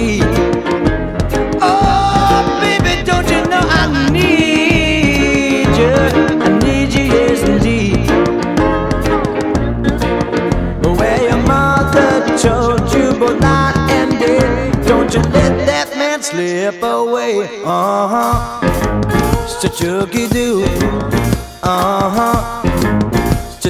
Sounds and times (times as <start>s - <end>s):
Swing music: 0.0s - 23.7s.